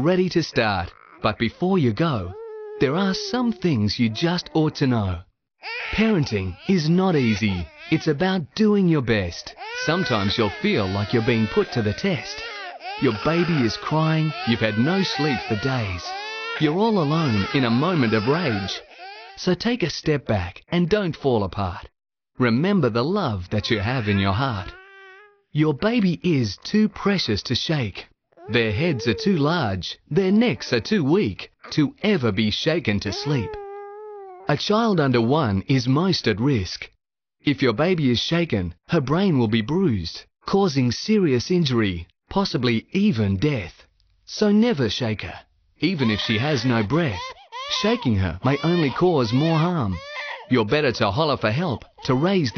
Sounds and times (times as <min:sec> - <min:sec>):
Speech: 0:00.0 - 0:24.8, 0:25.6 - 0:33.6, 0:34.5 - 0:52.5
Baby cry, infant cry: 0:00.9 - 0:01.3, 0:02.3 - 0:04.6, 0:05.6 - 0:08.2, 0:09.4 - 0:19.4, 0:23.6 - 0:25.4, 0:28.4 - 0:29.4, 0:33.1 - 0:34.5, 0:45.9 - 0:50.5, 0:52.0 - 0:52.5.